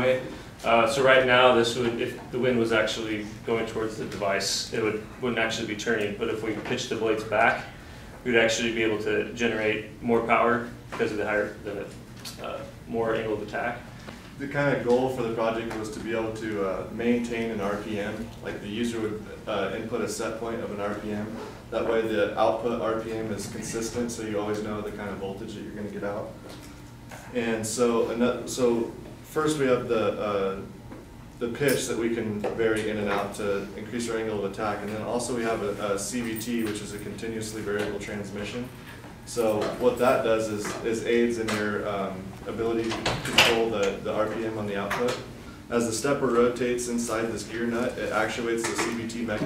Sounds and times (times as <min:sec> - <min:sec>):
Speech: 0:00.0 - 0:26.4, 0:27.2 - 0:30.8, 0:31.4 - 0:49.4.